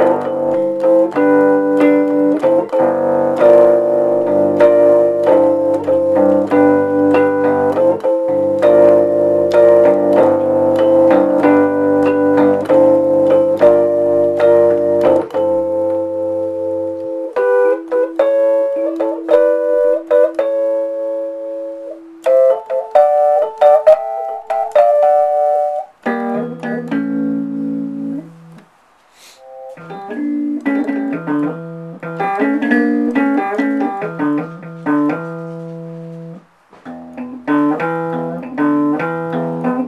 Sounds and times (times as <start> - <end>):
Guitar: 0.0 - 39.8.